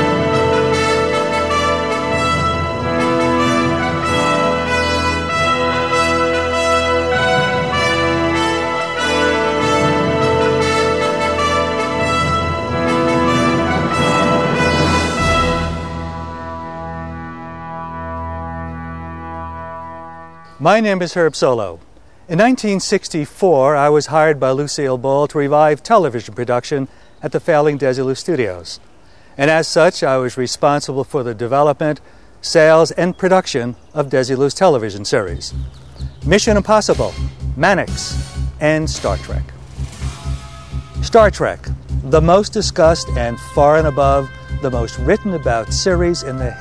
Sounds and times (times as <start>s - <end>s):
Music: 0.0s - 20.7s, 35.2s - 46.6s.